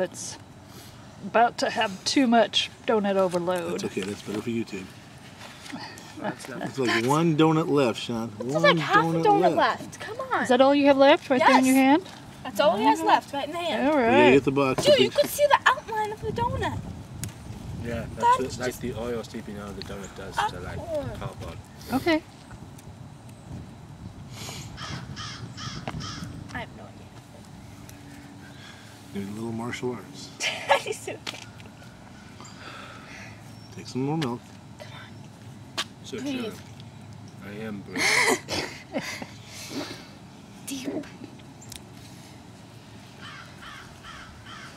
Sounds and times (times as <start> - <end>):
Outside, rural or natural: 0.0 - 44.7
Crow: 24.8 - 26.3, 43.2 - 44.7.